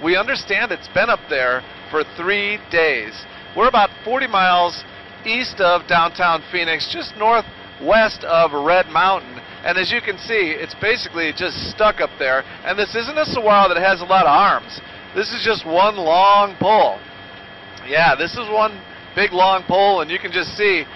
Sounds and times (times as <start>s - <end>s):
Speech: 0.0s - 17.0s, 17.8s - 20.9s.